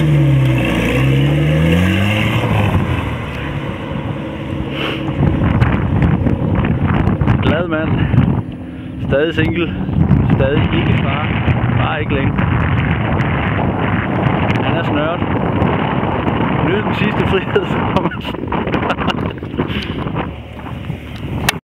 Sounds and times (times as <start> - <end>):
Car: 0.0 - 21.6
Speech: 7.4 - 8.1, 9.0 - 12.4, 14.6 - 15.2, 16.6 - 17.8.